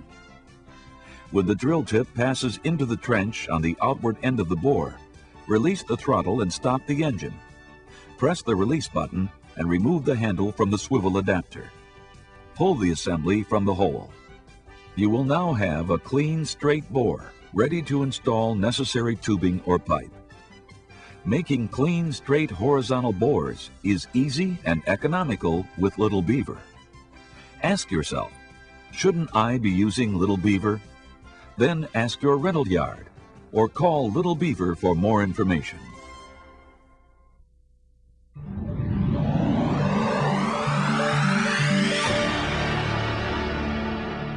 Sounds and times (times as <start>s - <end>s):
Music: 0.0s - 37.6s, 38.4s - 44.3s
Speech: 1.3s - 7.4s, 8.2s - 11.7s, 12.6s - 14.2s, 15.0s - 20.1s, 21.2s - 26.6s, 27.6s - 28.4s, 29.0s - 30.8s, 31.6s - 36.0s.